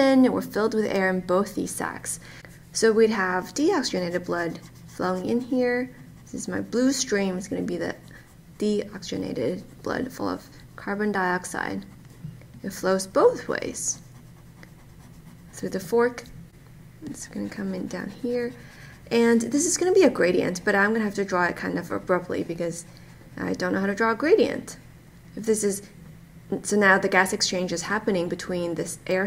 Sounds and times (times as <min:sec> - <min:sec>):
Speech: 0:00.0 - 0:02.2, 0:02.8 - 0:11.9, 0:12.6 - 0:14.0, 0:15.6 - 0:16.3, 0:17.0 - 0:24.8, 0:25.4 - 0:25.9, 0:26.5 - 0:29.2
Writing: 0:02.5 - 0:05.5, 0:13.8 - 0:15.8, 0:17.1 - 0:20.1.